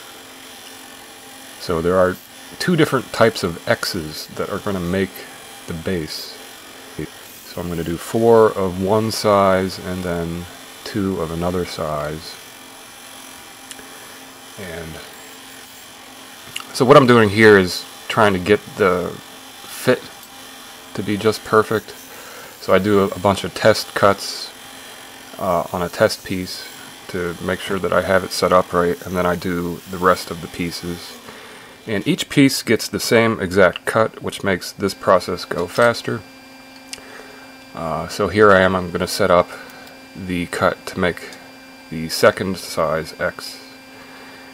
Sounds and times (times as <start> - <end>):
Speech: 1.6 - 6.4, 7.0 - 12.4, 14.6 - 15.1, 16.6 - 20.1, 20.9 - 22.0, 22.6 - 24.6, 25.4 - 31.2, 31.9 - 36.2, 37.7 - 39.6, 40.2 - 43.8.